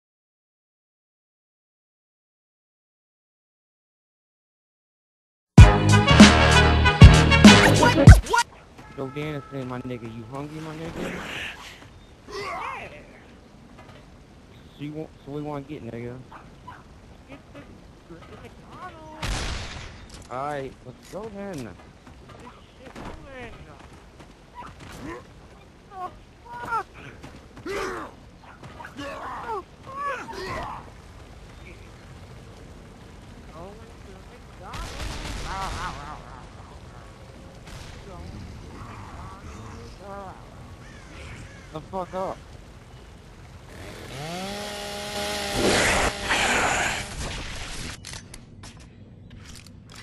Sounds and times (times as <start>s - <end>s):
Speech: 7.7s - 11.1s, 22.4s - 23.8s, 33.5s - 36.8s.